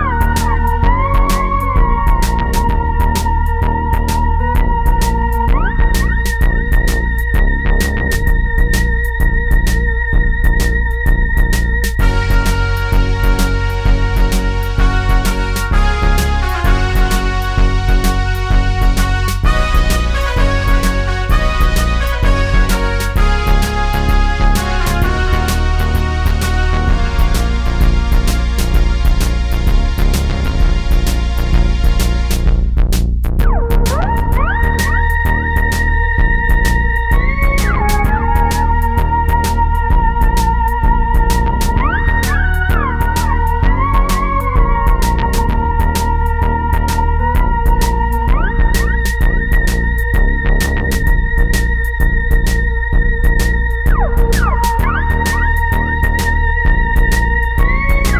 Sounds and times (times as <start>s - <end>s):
Sound effect: 0.0s - 13.7s, 33.4s - 58.1s
Music: 0.0s - 58.1s.